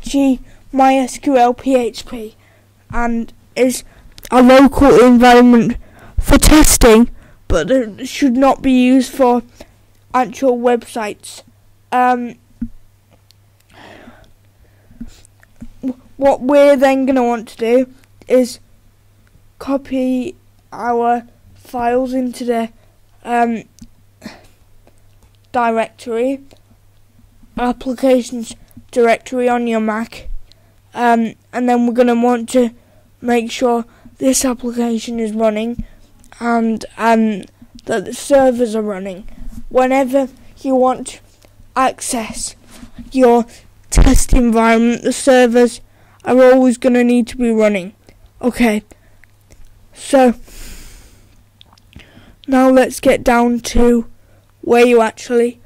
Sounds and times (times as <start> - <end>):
Speech: 0.0 - 9.5, 10.1 - 12.4, 15.8 - 18.6, 19.6 - 24.5, 25.5 - 26.6, 27.6 - 30.3, 30.9 - 48.9, 50.0 - 50.4, 52.5 - 55.6.